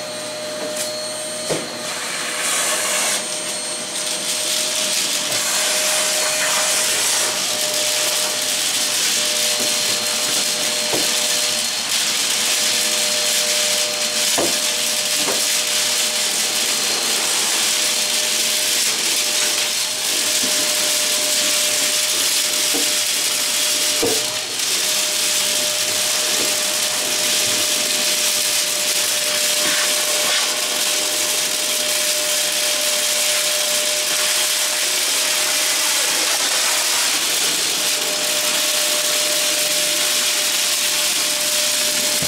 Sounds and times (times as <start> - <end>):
Vacuum cleaner: 0.0 - 42.2.